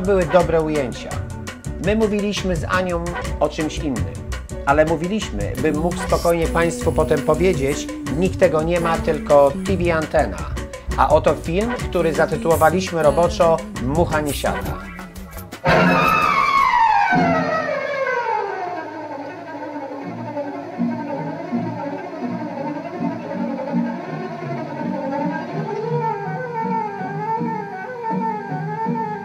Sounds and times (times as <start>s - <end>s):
Music: 0.0s - 29.2s.